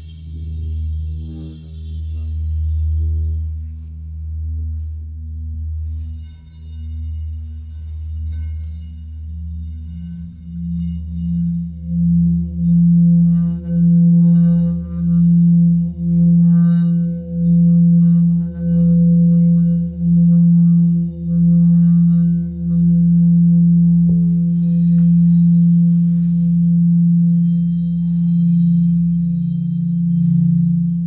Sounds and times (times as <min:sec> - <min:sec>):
Didgeridoo: 0:00.0 - 0:31.0
Singing bowl: 0:00.0 - 0:31.0.